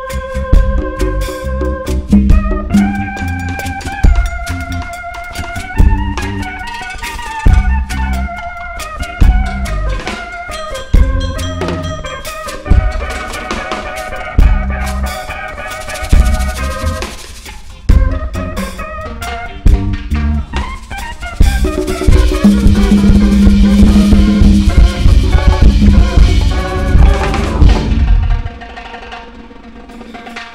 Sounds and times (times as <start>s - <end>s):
Bass drum: 0.0s - 6.7s, 7.4s - 8.4s, 9.0s - 15.3s, 15.9s - 17.2s, 17.8s - 28.8s.